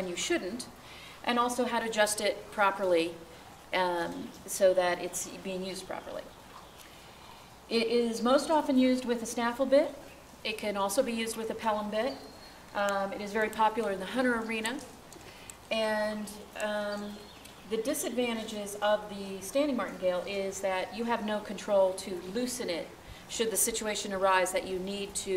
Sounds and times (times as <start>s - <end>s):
Speech: 0.0s - 0.7s, 1.3s - 3.2s, 3.8s - 6.3s, 7.7s - 12.2s, 12.8s - 14.9s, 15.7s - 25.3s.